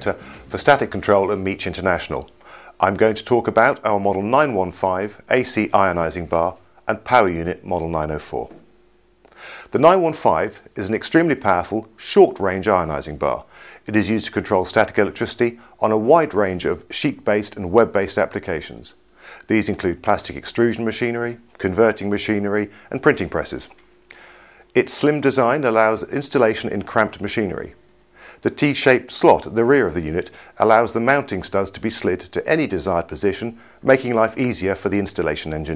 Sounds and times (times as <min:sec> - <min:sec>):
Speech: 0:00.0 - 0:08.6, 0:09.7 - 0:23.8, 0:24.8 - 0:27.8, 0:28.4 - 0:35.7.